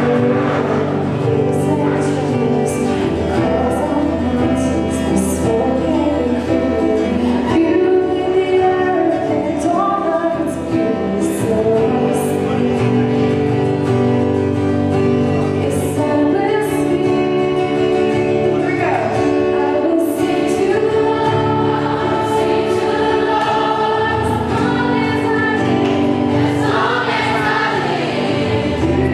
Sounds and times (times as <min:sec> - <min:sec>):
Female singing: 0:00.0 - 0:13.4, 0:15.5 - 0:18.8, 0:19.4 - 0:28.1
Music: 0:00.0 - 0:29.1.